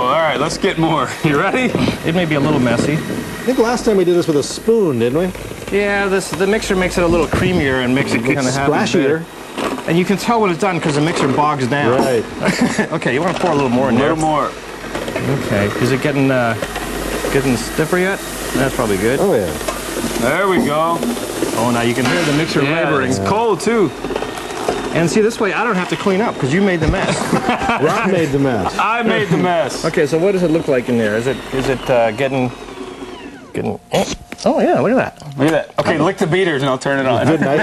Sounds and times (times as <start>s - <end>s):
Speech: 0.0s - 9.3s, 9.9s - 14.6s, 15.2s - 16.6s, 20.2s - 21.0s, 21.6s - 23.9s, 25.0s - 32.5s, 33.6s - 37.6s.